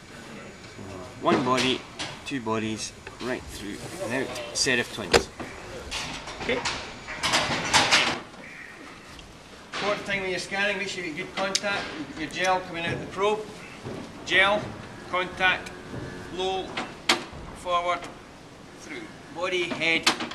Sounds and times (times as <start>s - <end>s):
Speech: 0.4s - 5.3s, 9.8s - 13.5s, 14.3s - 15.7s, 18.8s - 20.1s.